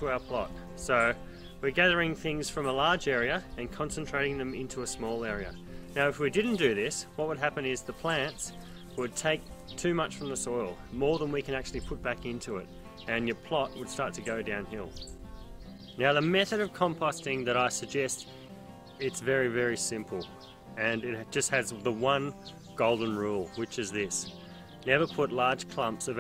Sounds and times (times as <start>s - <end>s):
Speech: 0.0s - 15.0s, 16.0s - 18.2s, 19.0s - 24.3s, 24.9s - 26.2s
Music: 0.0s - 26.2s.